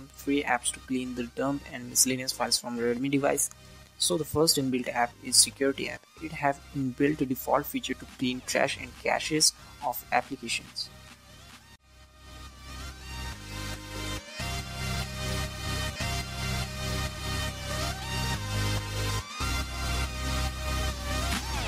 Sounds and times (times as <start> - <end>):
Speech: 0.0 - 10.9
Music: 0.0 - 21.6.